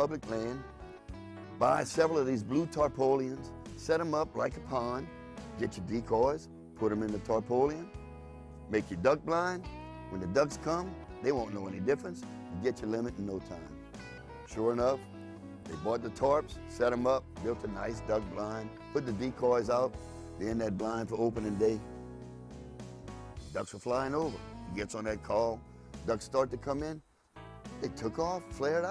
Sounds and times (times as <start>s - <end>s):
Speech: 0.0s - 0.7s, 1.6s - 7.9s, 8.7s - 13.8s, 14.5s - 15.0s, 15.7s - 21.8s, 23.5s - 27.0s, 27.8s - 28.9s
Music: 0.0s - 28.9s.